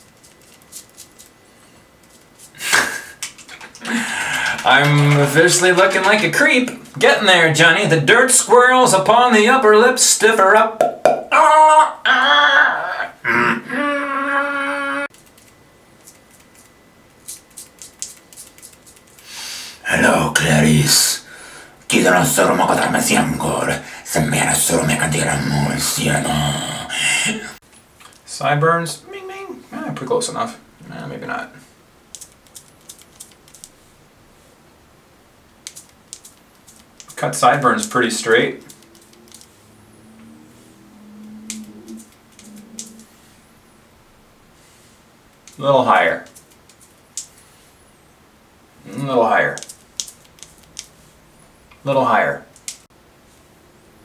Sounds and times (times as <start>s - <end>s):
Speech: 4.6s - 10.8s, 19.8s - 21.3s, 21.9s - 27.6s, 28.3s - 31.6s, 37.2s - 38.6s, 45.6s - 46.3s, 48.8s - 49.6s, 51.8s - 52.5s.